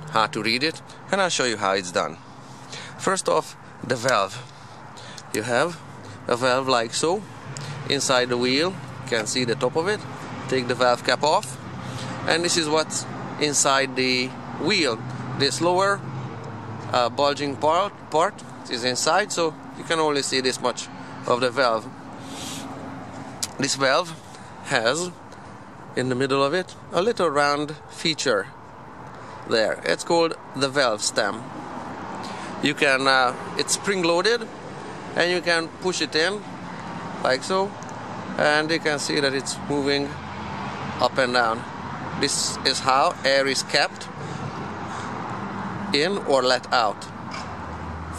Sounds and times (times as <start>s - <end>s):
Speech: 0.0s - 2.2s, 3.0s - 4.5s, 5.3s - 7.3s, 7.9s - 11.6s, 12.3s - 16.0s, 16.9s - 21.9s, 23.4s - 25.2s, 26.0s - 28.6s, 29.5s - 31.5s, 32.6s - 34.5s, 35.2s - 36.5s, 37.2s - 37.8s, 38.4s - 40.2s, 41.0s - 44.1s, 45.9s - 47.1s.